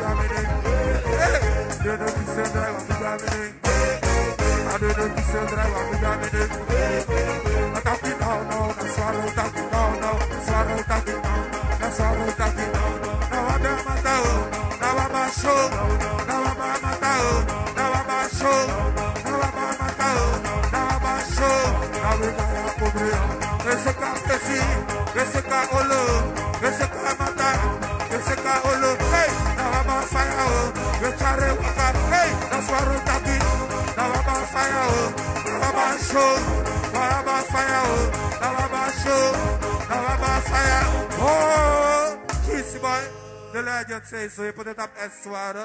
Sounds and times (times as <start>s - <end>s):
Music: 0.0s - 45.6s.